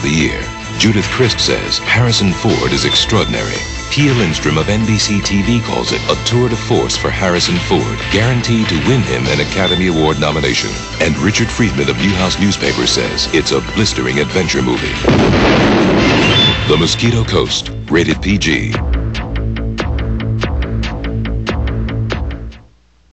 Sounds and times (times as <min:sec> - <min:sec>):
Speech: 0:00.0 - 0:15.1, 0:16.6 - 0:18.8
Music: 0:00.0 - 0:22.9.